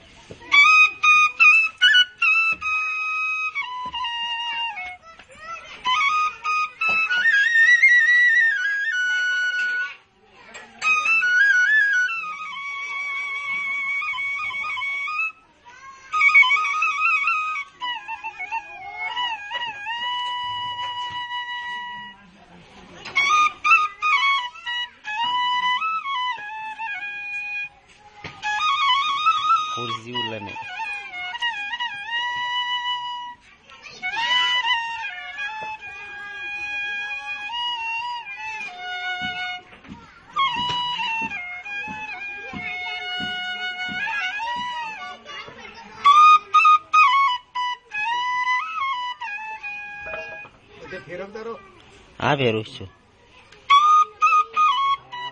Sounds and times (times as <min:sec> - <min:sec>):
Flute: 0:00.0 - 0:55.3
Traditional music: 0:00.0 - 0:55.3
Child speech, kid speaking: 0:04.5 - 0:08.2, 0:09.0 - 0:11.2, 0:15.3 - 0:17.1, 0:27.7 - 0:28.5, 0:33.3 - 0:37.6, 0:38.3 - 0:41.2, 0:41.8 - 0:47.0, 0:50.1 - 0:55.3.